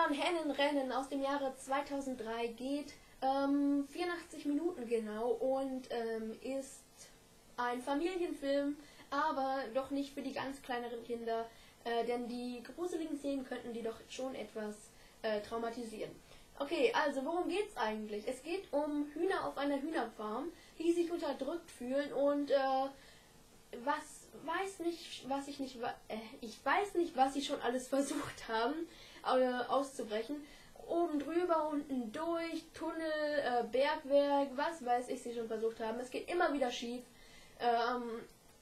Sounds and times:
Speech: 0:00.0 - 0:23.0, 0:23.7 - 0:38.4.

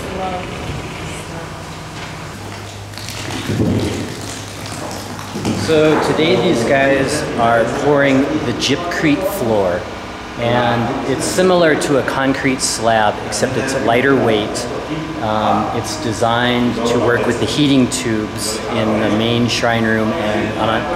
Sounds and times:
Speech: 0:05.5 - 0:20.9.

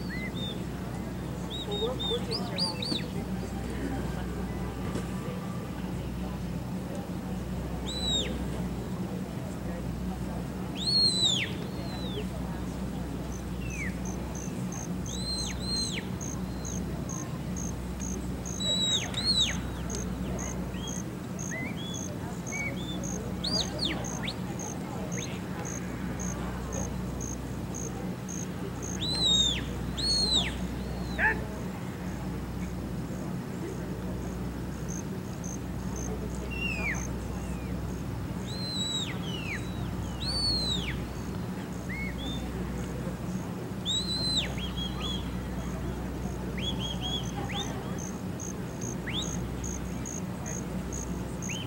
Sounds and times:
Cricket: 0:13.3 - 0:31.3, 0:32.6 - 0:51.6.

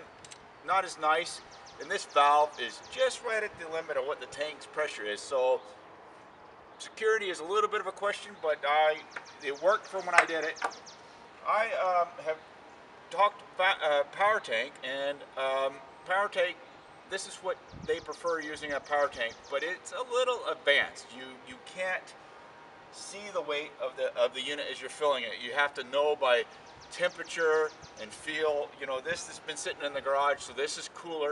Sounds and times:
Speech: 0:00.6 - 0:05.7, 0:06.8 - 0:10.8, 0:11.4 - 0:12.4, 0:13.1 - 0:22.2, 0:23.0 - 0:31.3.

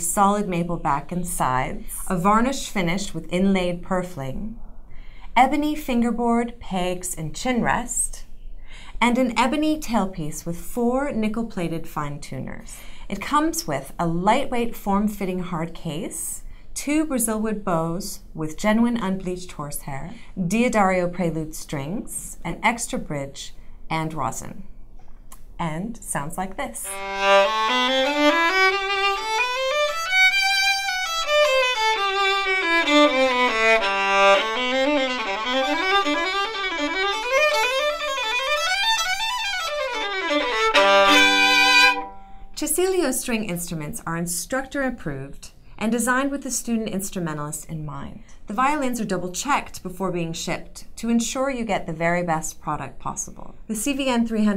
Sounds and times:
Speech: 0:00.0 - 0:04.6, 0:05.4 - 0:08.3, 0:09.0 - 0:24.6, 0:25.6 - 0:27.0, 0:42.6 - 0:54.5.

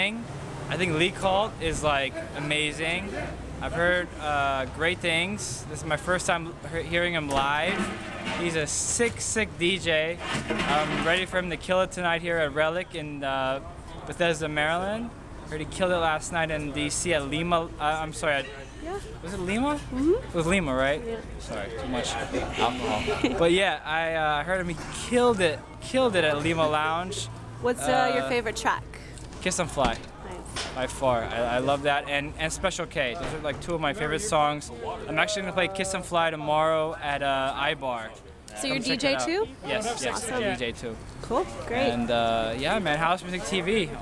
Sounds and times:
Speech: 0:30.8 - 0:41.0, 0:41.7 - 0:44.0.

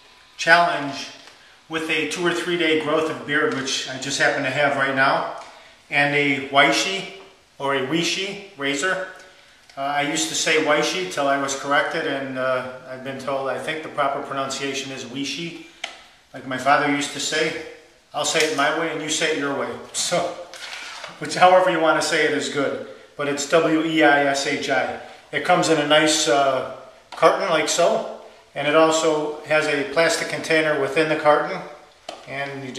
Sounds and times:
Speech: 0:00.4 - 0:15.6, 0:16.3 - 0:20.5, 0:21.1 - 0:32.7.

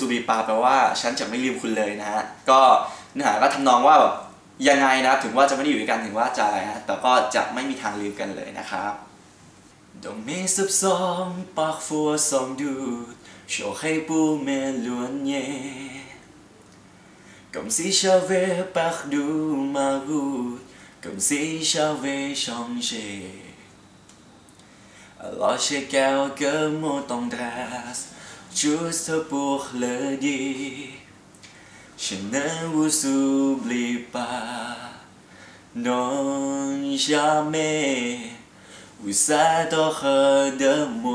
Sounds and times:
Male singing: 0:00.0 - 0:09.0, 0:10.0 - 0:16.2, 0:17.5 - 0:23.6, 0:25.2 - 0:31.1, 0:32.0 - 0:35.1, 0:35.8 - 0:41.1
Speech: 0:00.0 - 0:09.1.

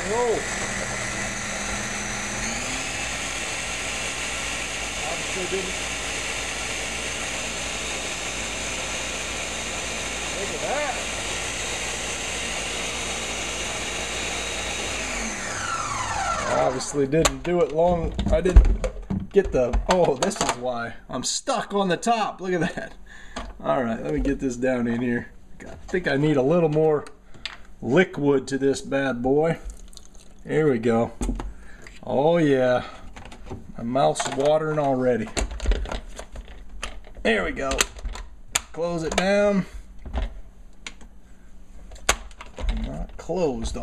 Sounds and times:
Speech: 0:00.0 - 0:00.5, 0:05.0 - 0:05.8, 0:10.3 - 0:11.1, 0:16.5 - 0:18.7, 0:19.3 - 0:22.9, 0:23.6 - 0:27.1, 0:27.8 - 0:29.6, 0:30.4 - 0:31.2, 0:32.0 - 0:33.0, 0:33.8 - 0:35.4, 0:37.2 - 0:37.9, 0:38.8 - 0:39.7, 0:42.7 - 0:43.8
Blender: 0:00.0 - 0:17.1.

